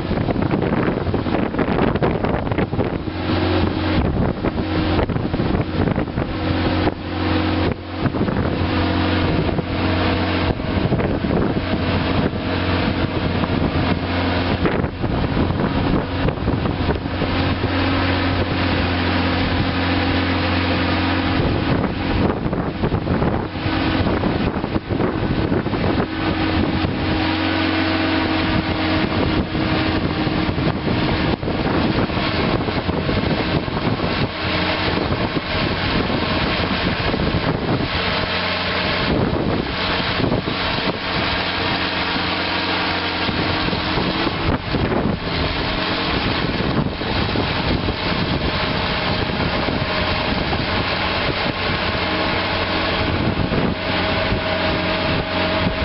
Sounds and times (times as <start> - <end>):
Vehicle: 0.0 - 55.8.